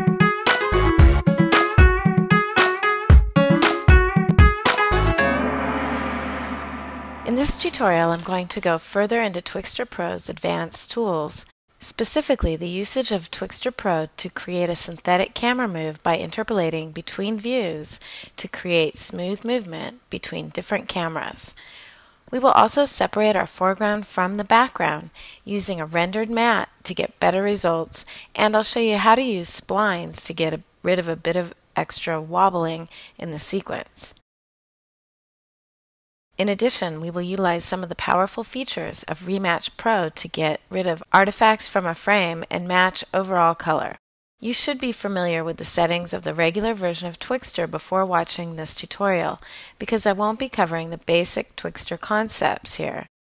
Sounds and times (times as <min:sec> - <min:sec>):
Speech: 0:07.3 - 0:21.6, 0:22.3 - 0:34.2, 0:36.4 - 0:53.1.